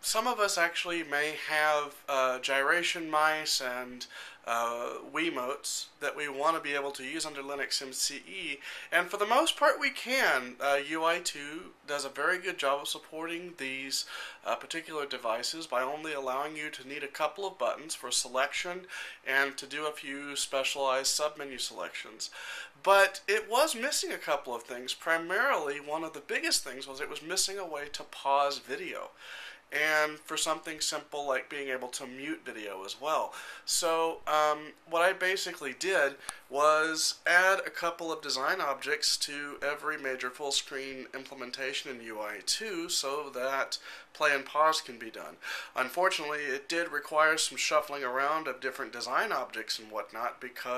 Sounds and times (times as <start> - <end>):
Speech: 0.0 - 50.7.